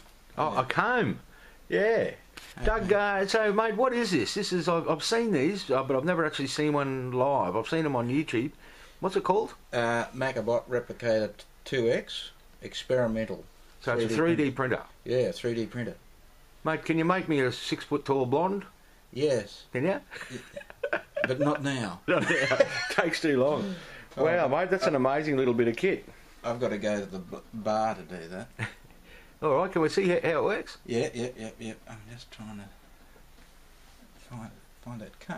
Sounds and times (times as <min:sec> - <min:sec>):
Speech: 0:00.4 - 0:16.0, 0:22.9 - 0:28.5, 0:29.4 - 0:32.8, 0:34.2 - 0:35.3.